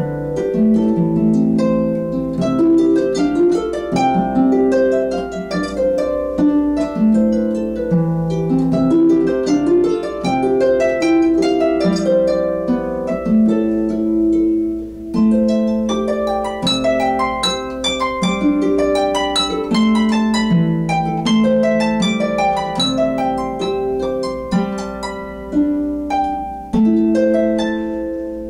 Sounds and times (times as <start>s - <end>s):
Harp: 0.0s - 28.4s
Plucked string instrument: 0.0s - 28.4s.